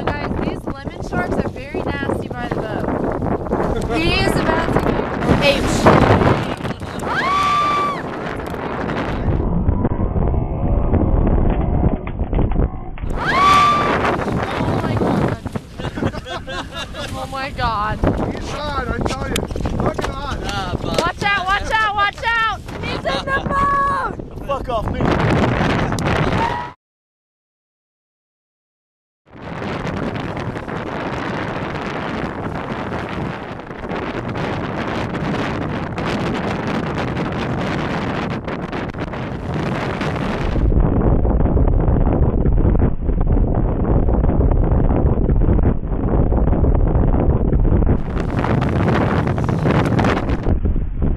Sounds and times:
Speech: 0.0 - 2.8, 3.9 - 7.0, 14.4 - 15.4, 17.1 - 25.0.

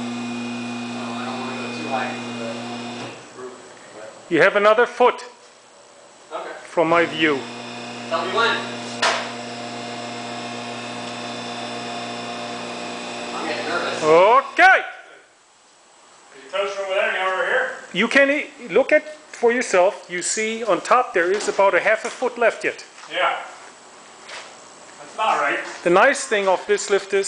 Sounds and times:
Speech: 1.0 - 2.7, 3.4 - 5.4, 6.3 - 7.4, 8.1 - 8.7, 13.4 - 15.1, 16.3 - 23.6, 25.0 - 27.2.

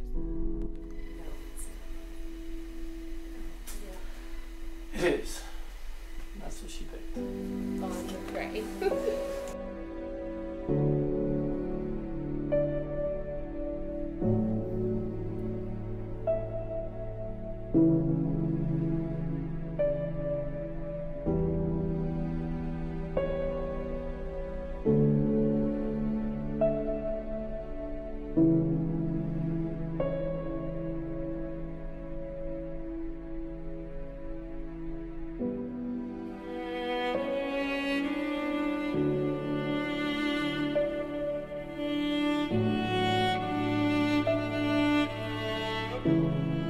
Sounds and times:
Cello: 0.0 - 46.6.

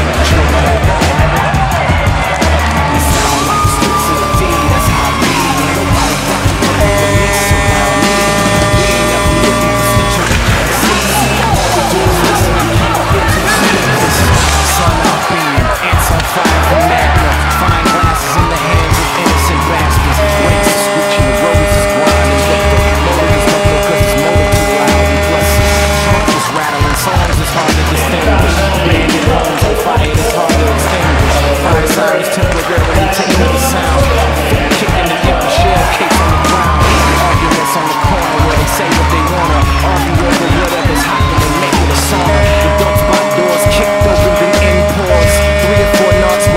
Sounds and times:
Speech: 0.0 - 1.4, 8.1 - 46.5
Music: 0.0 - 46.5.

